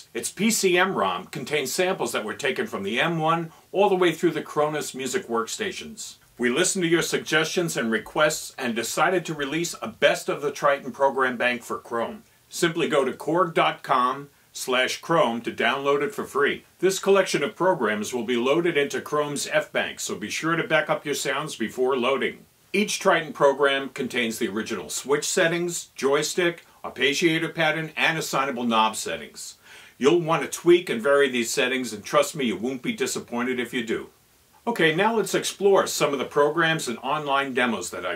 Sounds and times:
Speech: 0.0s - 38.1s.

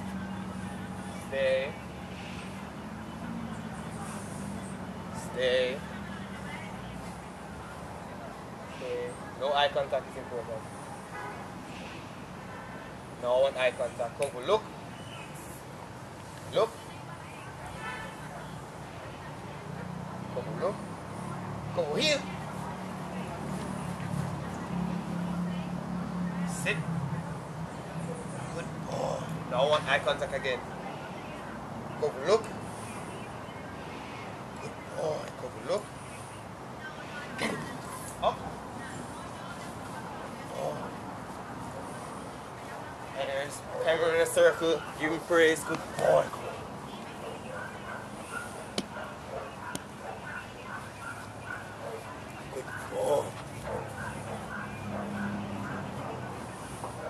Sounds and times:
Outside, rural or natural: 0.0s - 57.1s
Dog: 47.2s - 57.1s.

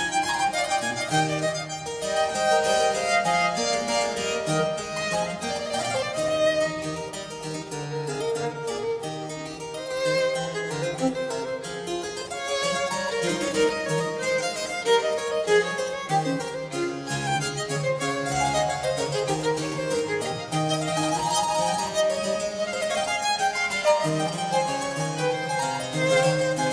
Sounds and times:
Harpsichord: 0.0s - 26.7s.

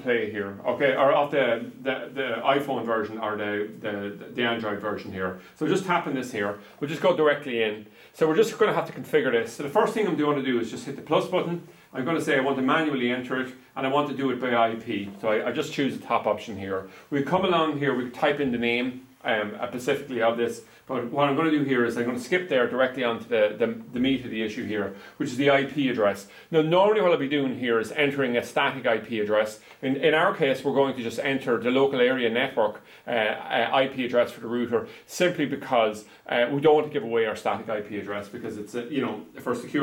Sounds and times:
Speech: 0.0s - 39.8s.

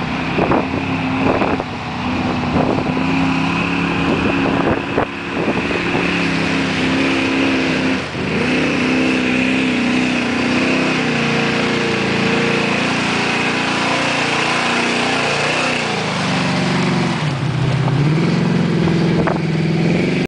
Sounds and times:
Car: 0.0s - 20.2s.

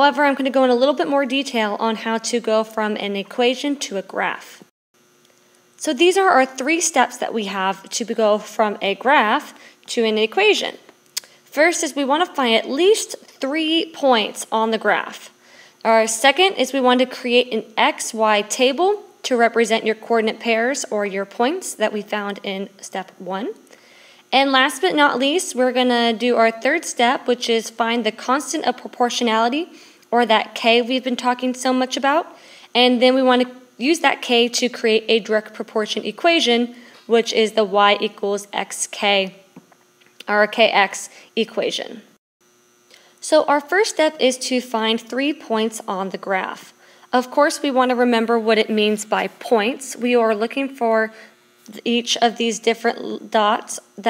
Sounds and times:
Speech: 0.0s - 4.7s, 5.8s - 10.9s, 11.5s - 23.6s, 24.3s - 39.4s, 40.2s - 42.1s, 43.2s - 54.0s.

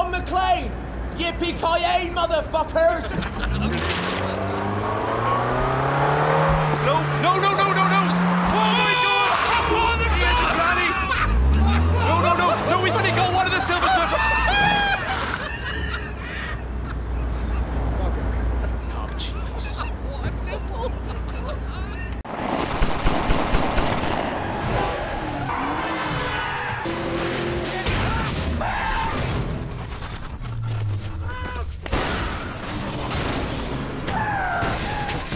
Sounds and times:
Skidding: 3.2s - 18.7s, 23.9s - 35.3s.

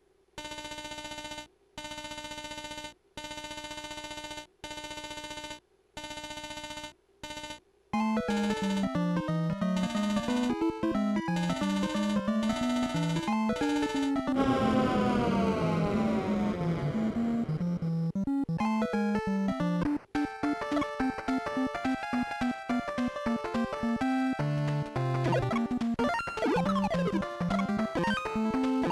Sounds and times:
Music: 8.0s - 28.9s.

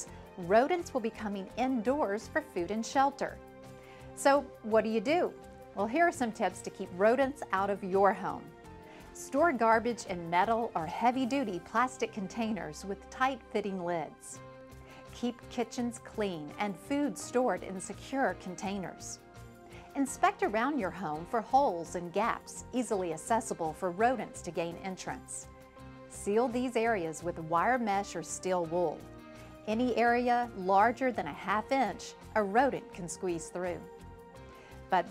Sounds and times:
Speech: 0.0s - 3.4s, 4.2s - 8.5s, 9.2s - 14.4s, 15.1s - 19.2s, 20.0s - 25.4s, 26.2s - 29.0s, 29.7s - 33.9s
Music: 0.0s - 35.1s.

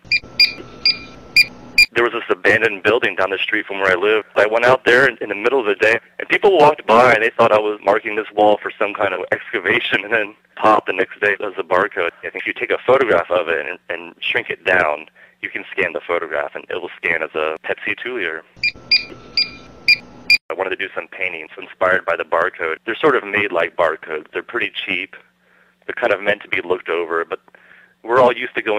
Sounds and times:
Speech: 1.9s - 18.5s, 20.5s - 25.3s, 25.9s - 27.4s, 28.0s - 28.7s.

